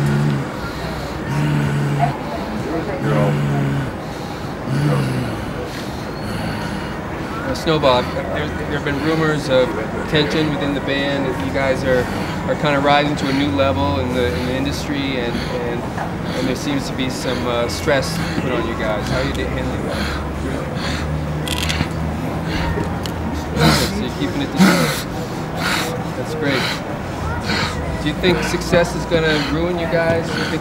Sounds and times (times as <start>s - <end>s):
Speech: 0.0s - 4.0s, 7.3s - 20.9s, 22.6s - 30.6s.